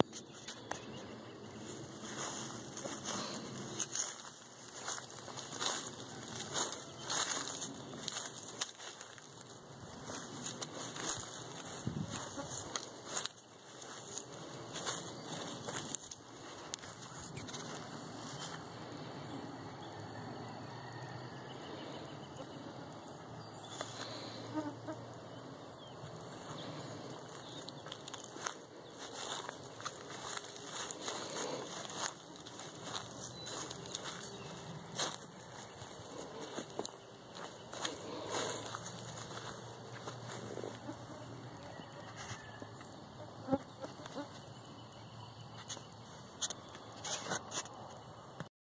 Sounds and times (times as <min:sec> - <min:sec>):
Outside, rural or natural: 0:00.0 - 0:48.5.